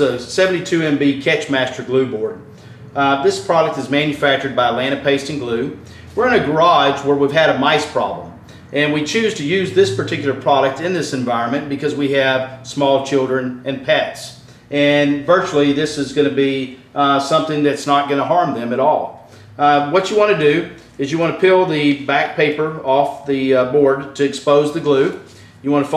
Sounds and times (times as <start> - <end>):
Speech: 0.0 - 25.9.